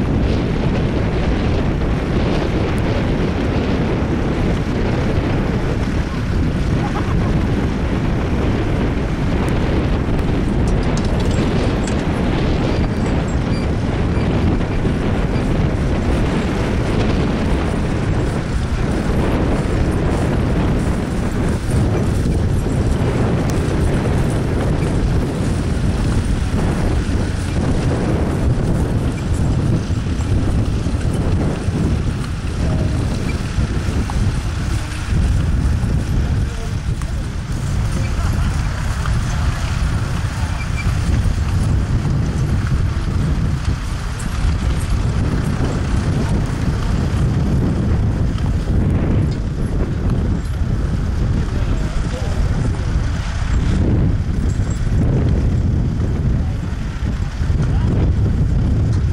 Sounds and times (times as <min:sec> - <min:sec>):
Outside, rural or natural: 0:00.0 - 0:59.1.